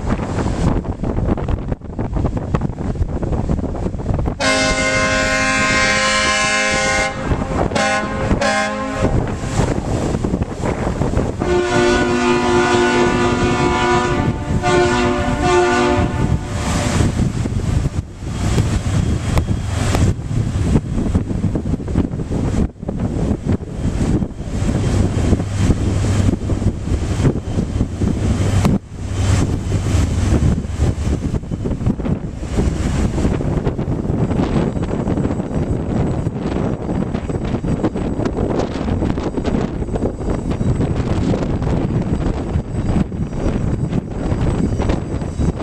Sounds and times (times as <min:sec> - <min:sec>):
Waves, surf: 0:00.0 - 0:34.5
Ship: 0:00.0 - 0:45.6
Wind noise (microphone): 0:00.0 - 0:45.6.